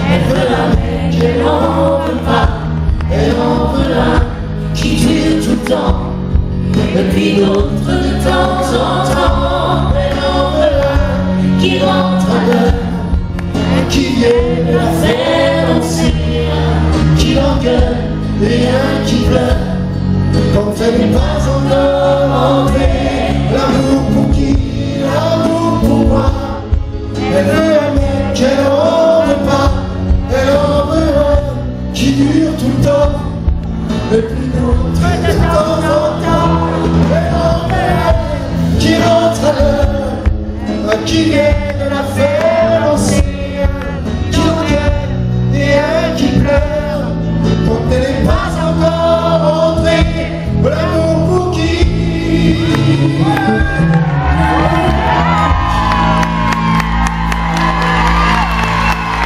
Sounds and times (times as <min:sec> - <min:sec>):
Singing: 0:00.0 - 0:33.4, 0:34.0 - 0:59.2
Gospel music: 0:00.0 - 0:59.2.